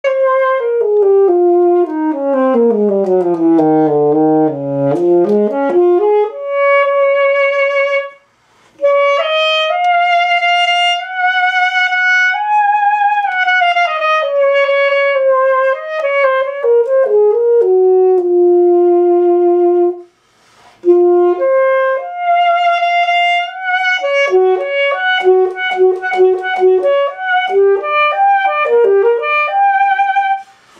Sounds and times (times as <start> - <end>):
Brass instrument: 0.0 - 30.7
Saxophone: 0.0 - 30.7.